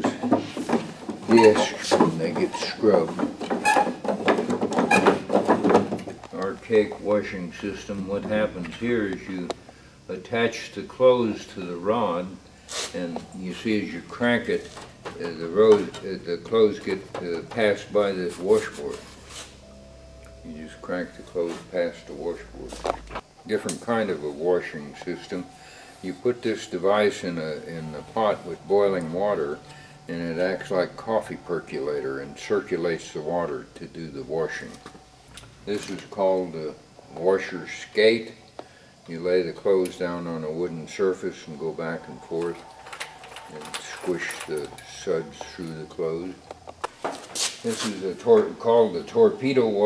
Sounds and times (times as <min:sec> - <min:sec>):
Speech: 0:01.3 - 0:03.3, 0:06.3 - 0:19.0, 0:20.4 - 0:22.8, 0:23.5 - 0:34.8, 0:35.7 - 0:38.4, 0:39.1 - 0:42.6, 0:43.5 - 0:46.4, 0:47.6 - 0:49.8.